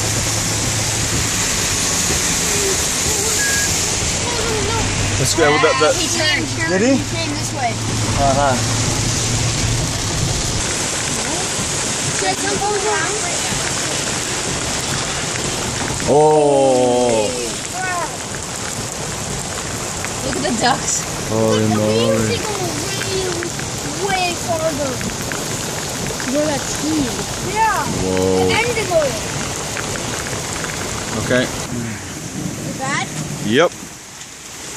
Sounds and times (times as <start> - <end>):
Rain on surface: 0.0 - 34.7.